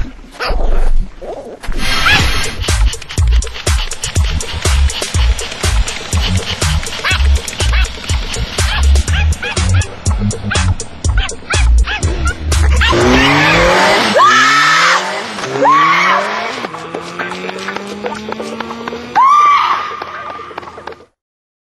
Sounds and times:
Music: 2.0s - 13.8s, 16.4s - 21.2s
Yip: 8.7s - 9.9s, 10.5s - 13.2s.

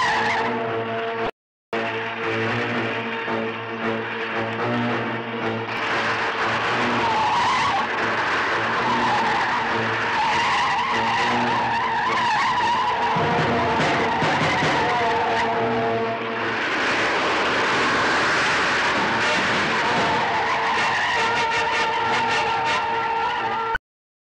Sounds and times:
Music: 0.0s - 17.7s, 18.5s - 23.8s
Car passing by: 1.8s - 22.2s.

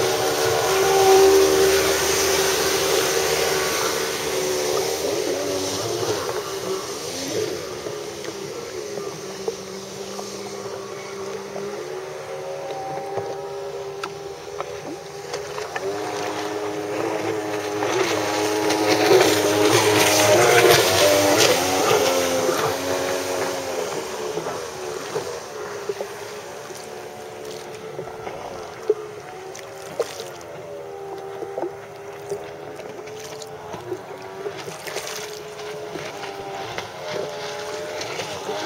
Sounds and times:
Stream: 0.0s - 38.6s.

